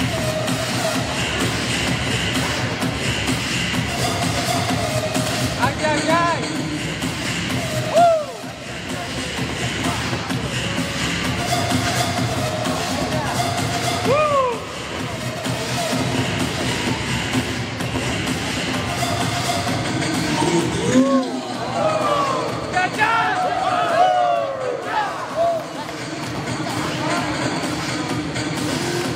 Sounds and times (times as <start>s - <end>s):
Music: 0.0s - 29.1s.